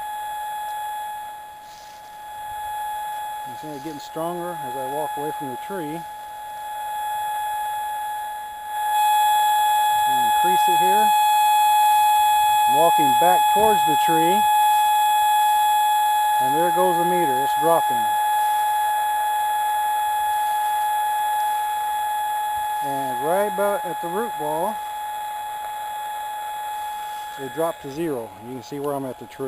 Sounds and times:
Outside, rural or natural: 0.0s - 29.4s
Speech: 3.5s - 6.0s, 10.1s - 11.1s, 12.7s - 14.5s, 16.4s - 18.1s, 22.8s - 24.8s, 27.4s - 29.4s.

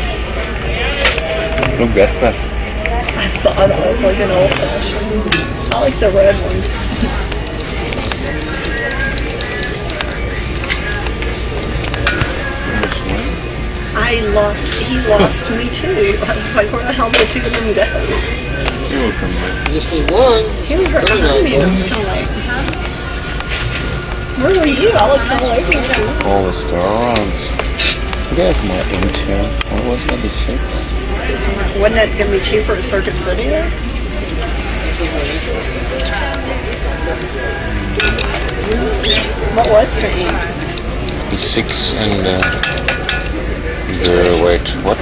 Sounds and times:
Speech: 14.0s - 22.8s, 24.4s - 27.5s, 28.3s - 30.7s, 41.3s - 42.6s, 43.8s - 45.0s.

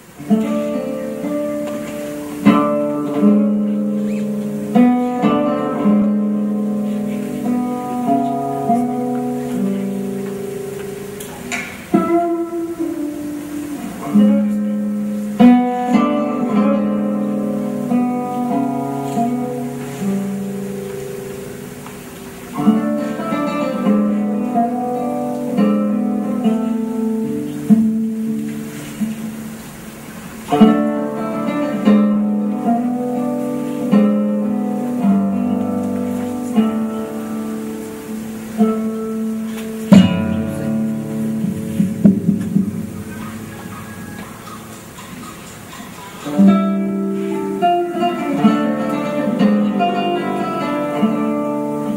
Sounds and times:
Strum: 0.0s - 51.9s.

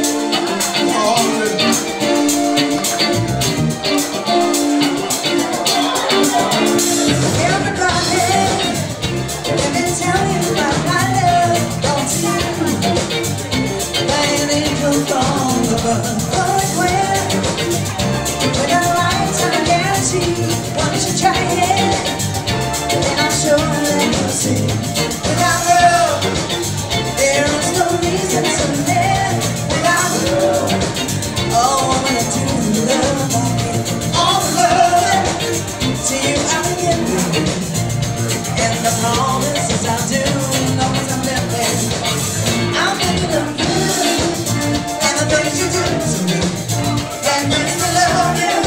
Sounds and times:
Music of Latin America: 0.0s - 48.6s
Singing: 4.3s - 48.6s.

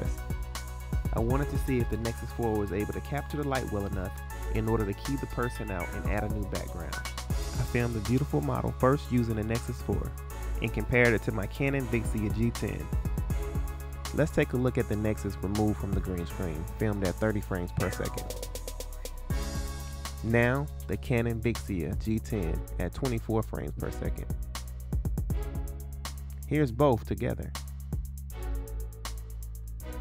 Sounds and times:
Music: 0.0s - 30.0s
Speech: 1.1s - 13.0s, 14.1s - 18.3s, 20.2s - 24.3s, 26.5s - 27.6s.

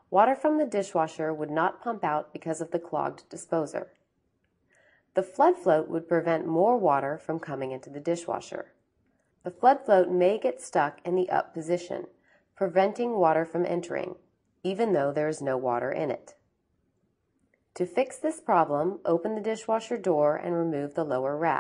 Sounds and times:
Speech: 0.1s - 3.9s, 5.2s - 8.7s, 9.5s - 16.3s, 17.8s - 21.6s.

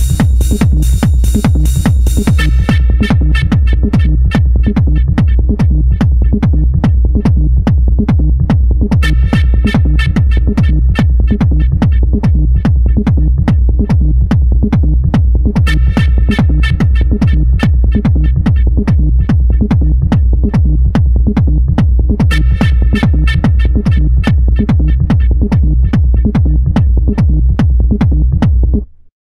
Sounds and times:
Techno: 0.0s - 28.8s.

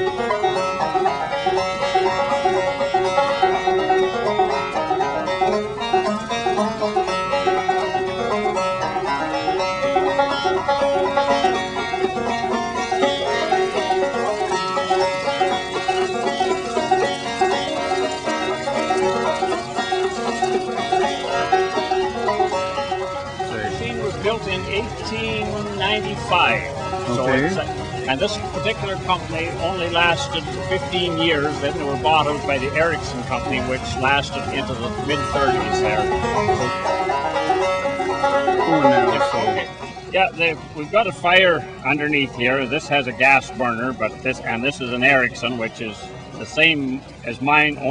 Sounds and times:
Engine: 0.0s - 47.9s
Music: 0.0s - 47.9s.

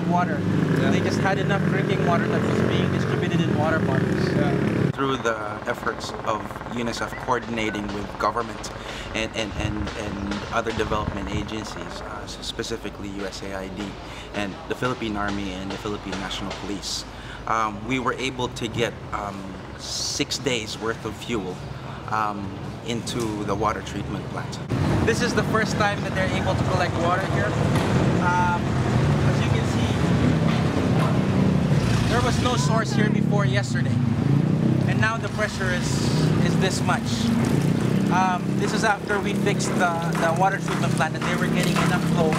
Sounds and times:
Speech: 0.0s - 27.6s, 28.2s - 30.0s, 32.1s - 34.0s, 34.9s - 37.4s, 38.1s - 42.3s.

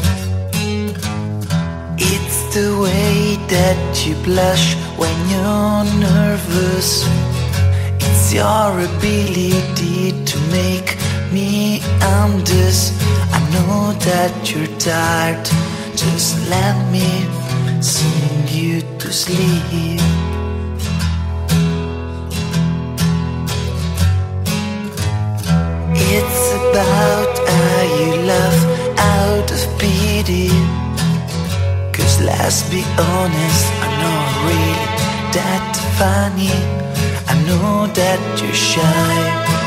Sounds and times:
Independent music: 0.0s - 39.6s.

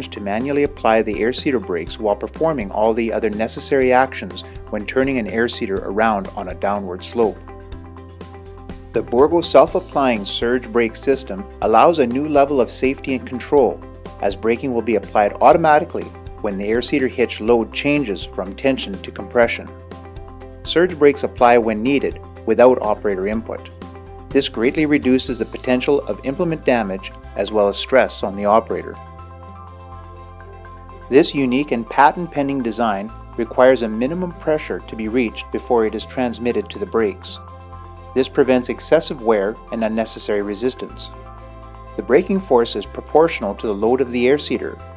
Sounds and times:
Speech: 0.0s - 7.4s, 9.0s - 19.7s, 20.7s - 23.7s, 24.4s - 29.0s, 31.1s - 37.4s, 38.2s - 41.1s, 42.0s - 44.8s
Music: 0.0s - 44.9s.

